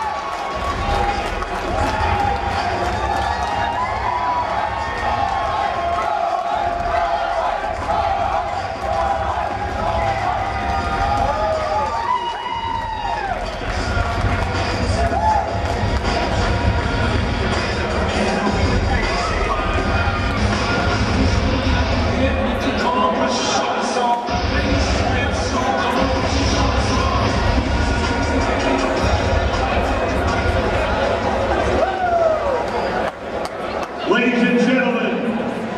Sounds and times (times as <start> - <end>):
Music: 0.0 - 32.9
Inside, large room or hall: 0.0 - 35.7
Inside, public space: 0.0 - 35.7.